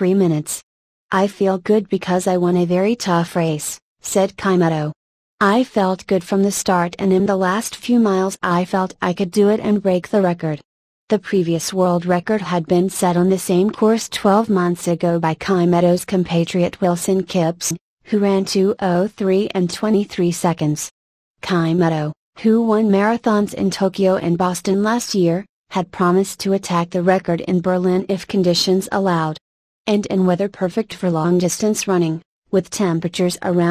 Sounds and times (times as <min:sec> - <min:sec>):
Speech: 0:00.0 - 0:33.7.